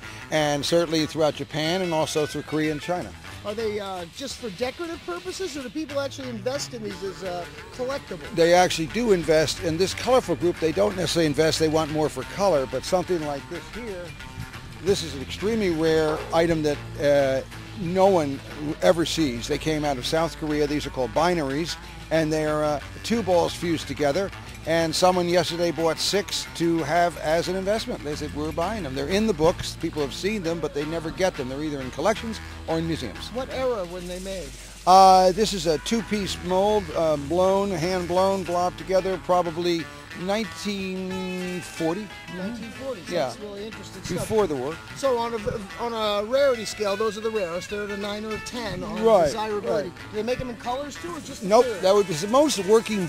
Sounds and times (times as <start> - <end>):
Music: 0.0 - 53.0
Speech: 0.3 - 14.1, 14.8 - 53.0.